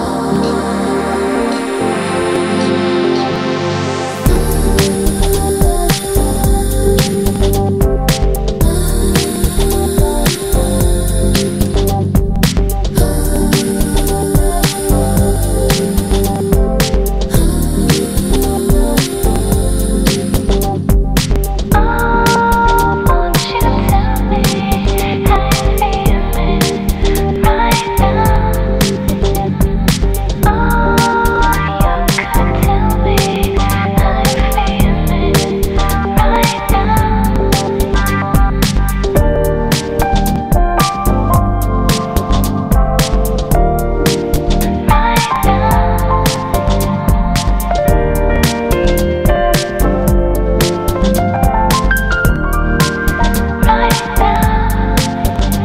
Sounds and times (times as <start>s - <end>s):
Music: 0.0s - 55.6s.